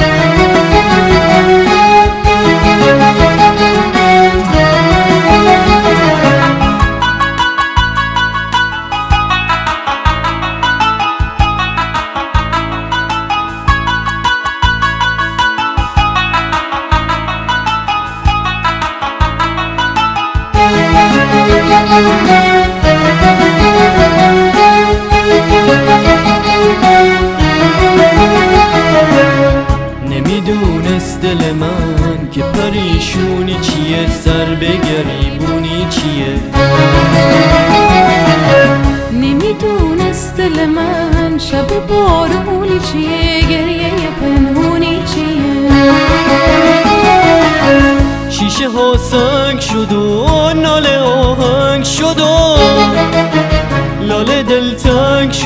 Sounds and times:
Independent music: 0.0s - 55.4s.

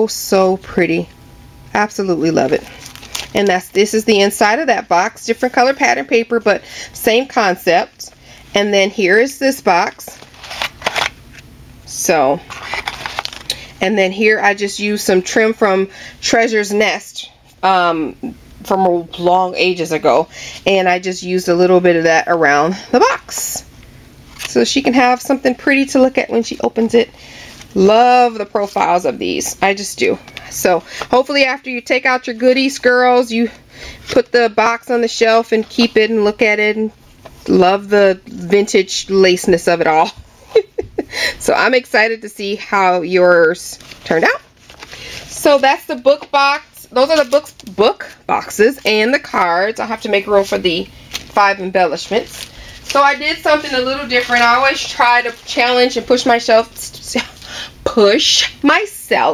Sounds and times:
Speech: 0.0s - 1.1s, 1.8s - 2.7s, 3.4s - 10.2s, 11.9s - 12.4s, 13.8s - 23.7s, 24.5s - 27.1s, 27.8s - 36.9s, 37.5s - 40.2s, 41.4s - 44.5s, 45.3s - 52.4s, 53.0s - 57.3s, 57.9s - 59.3s.

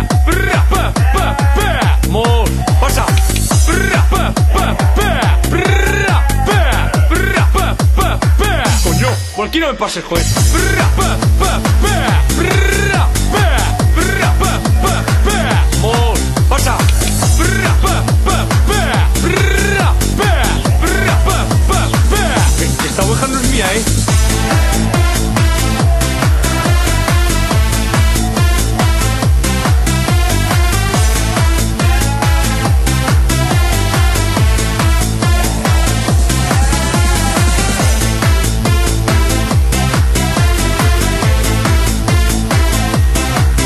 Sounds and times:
Techno: 0.0s - 43.6s.

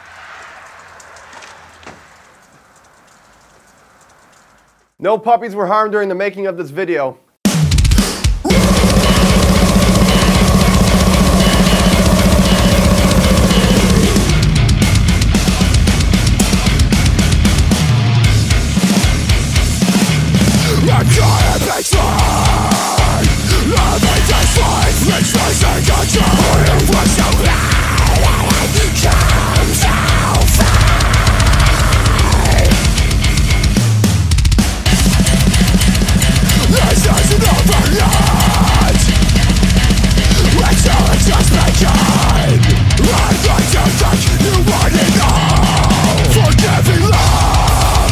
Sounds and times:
Music: 7.4s - 48.1s.

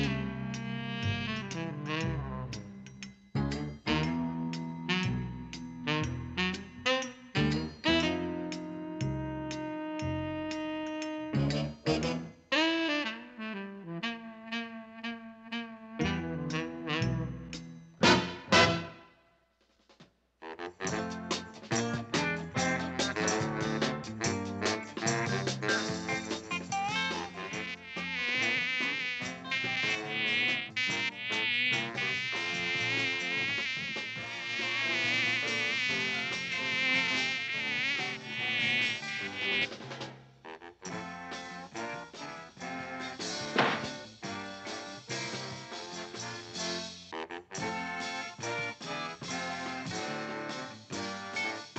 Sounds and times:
Music: 0.0s - 51.7s.

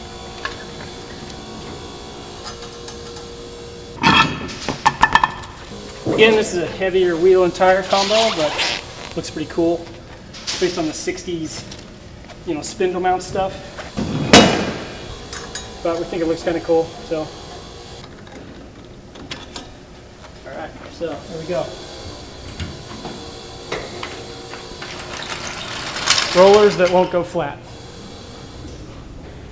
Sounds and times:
Speech: 6.1s - 8.6s, 9.2s - 9.9s, 10.6s - 11.6s, 12.5s - 13.6s, 15.8s - 17.3s, 20.4s - 21.8s, 26.3s - 27.6s.

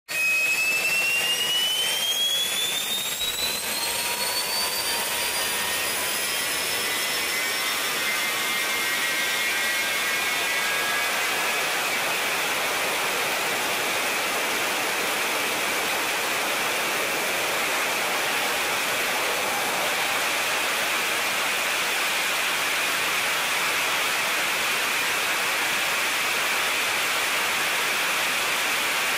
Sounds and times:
Jet engine: 0.1s - 29.1s
Inside, large room or hall: 0.2s - 29.1s.

